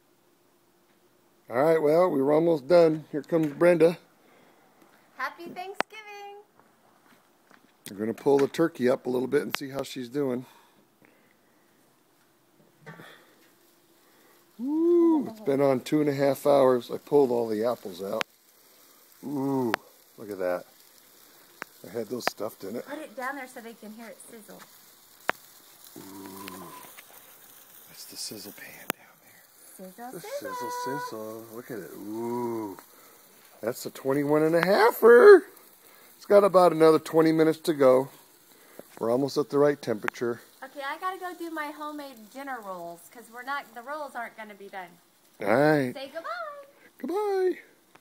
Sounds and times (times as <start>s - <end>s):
Speech: 30.0s - 32.8s, 45.4s - 47.7s.